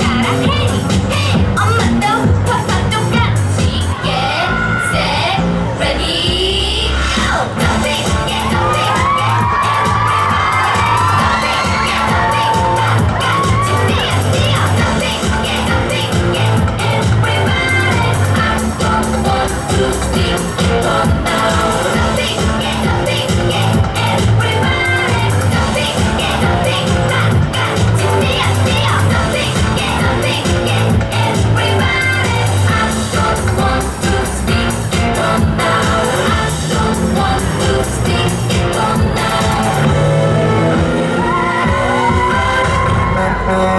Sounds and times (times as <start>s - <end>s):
Music: 0.0s - 43.7s.